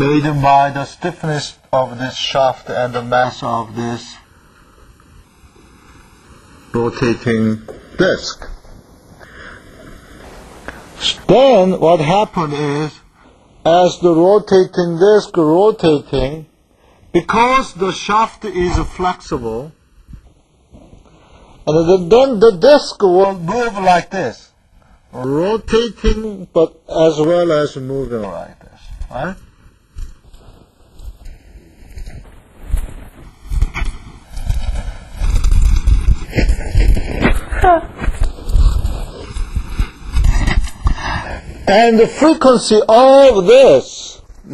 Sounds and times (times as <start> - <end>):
Speech: 0.0 - 4.2, 6.8 - 8.6, 11.0 - 13.0, 13.7 - 16.5, 17.2 - 19.8, 21.7 - 24.5, 25.2 - 29.4, 41.7 - 44.5.